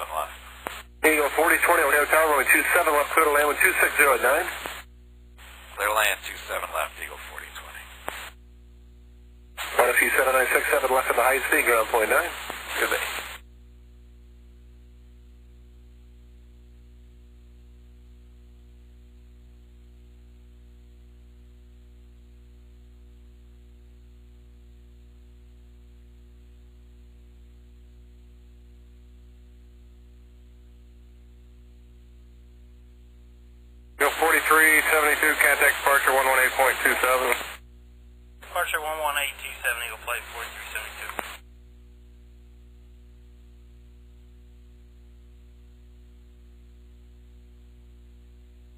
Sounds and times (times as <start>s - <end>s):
Speech: 0.0s - 0.4s, 1.0s - 4.6s, 5.8s - 7.9s, 9.6s - 13.2s, 34.0s - 37.6s, 38.4s - 41.4s.